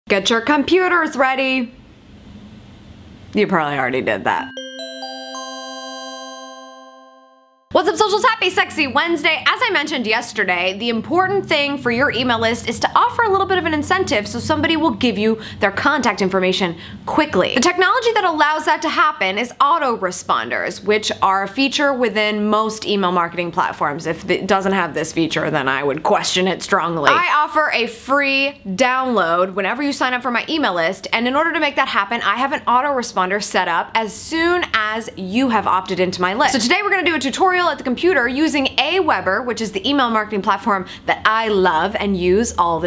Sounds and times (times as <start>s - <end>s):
Speech: 0.1s - 1.8s, 3.3s - 4.5s, 7.8s - 42.8s
Music: 4.5s - 7.7s.